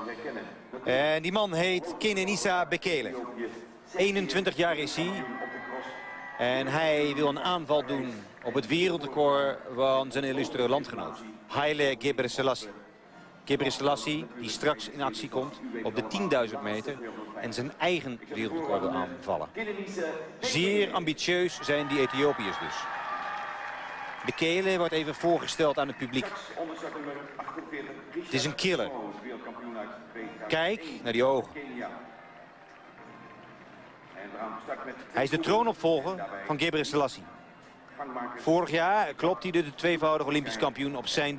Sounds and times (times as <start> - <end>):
Speech: 0.0 - 12.9, 13.5 - 22.8, 24.3 - 32.0, 34.2 - 37.3, 38.0 - 41.3.